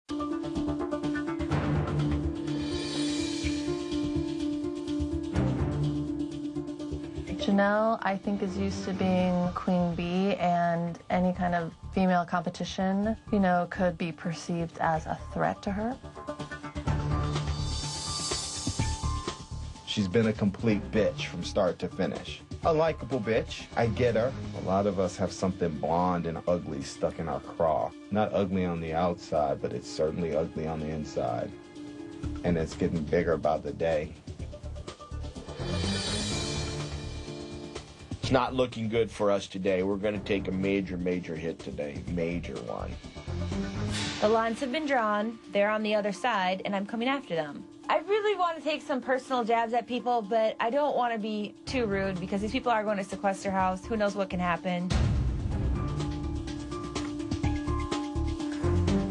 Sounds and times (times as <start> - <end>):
Female speech, woman speaking: 7.3 - 16.0, 44.2 - 54.9.